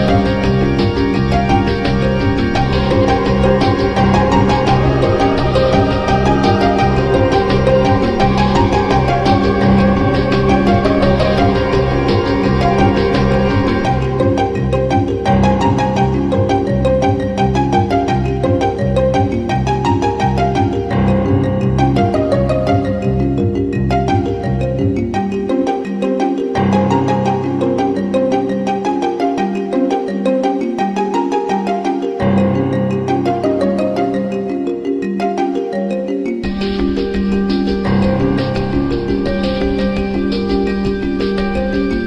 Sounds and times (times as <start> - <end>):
Soundtrack music: 0.0 - 42.0
Video game music: 0.0 - 42.0.